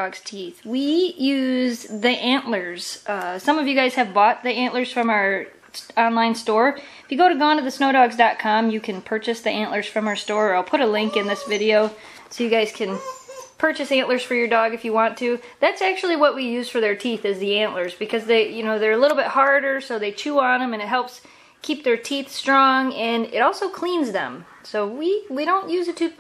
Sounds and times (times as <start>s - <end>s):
Speech: 0.0s - 26.2s.